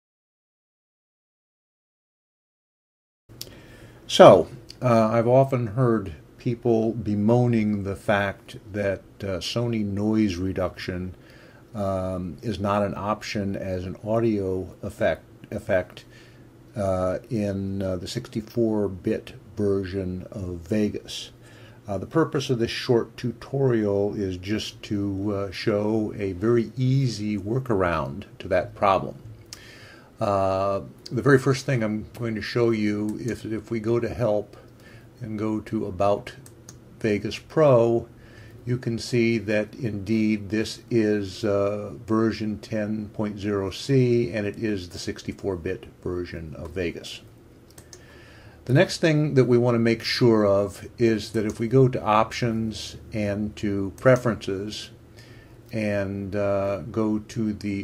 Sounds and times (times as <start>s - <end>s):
Speech: 4.1s - 16.1s, 16.7s - 29.3s, 30.2s - 47.3s, 48.6s - 55.0s, 55.7s - 57.8s.